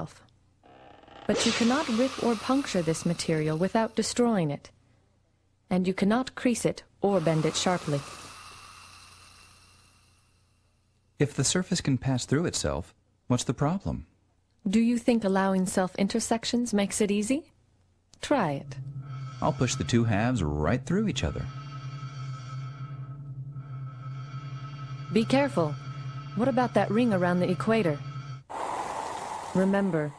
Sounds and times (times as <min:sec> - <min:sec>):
Speech: 0:05.7 - 0:08.0, 0:11.2 - 0:14.1, 0:14.7 - 0:17.5, 0:18.2 - 0:18.6, 0:19.4 - 0:21.5, 0:25.2 - 0:25.8, 0:26.4 - 0:28.0, 0:29.6 - 0:30.1
Music: 0:18.5 - 0:28.4.